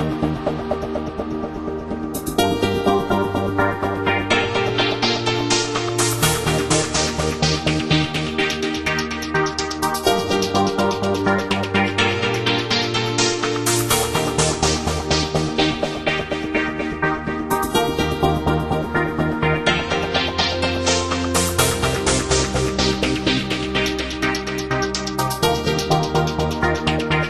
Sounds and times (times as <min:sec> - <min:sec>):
Music: 0:00.0 - 0:27.3.